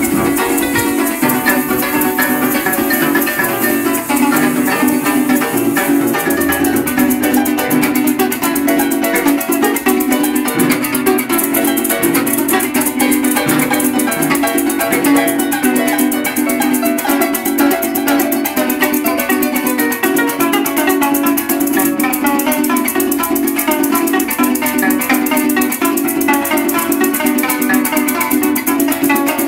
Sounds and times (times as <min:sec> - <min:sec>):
Plucked string instrument: 0:00.0 - 0:29.4
Rattle (instrument): 0:00.0 - 0:29.4.